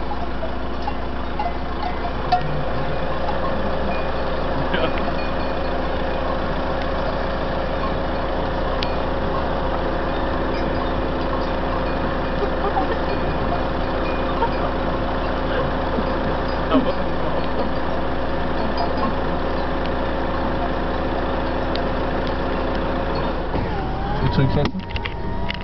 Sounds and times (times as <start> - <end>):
Speech: 4.6 - 5.1, 24.2 - 24.8.